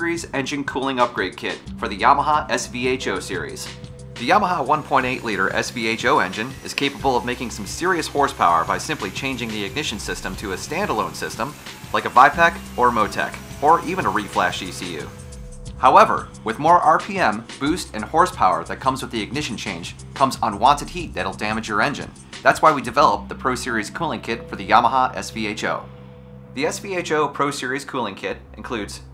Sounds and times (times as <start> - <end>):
Speech: 0.0 - 15.1, 15.8 - 25.9, 26.6 - 29.1
Music: 0.0 - 29.1.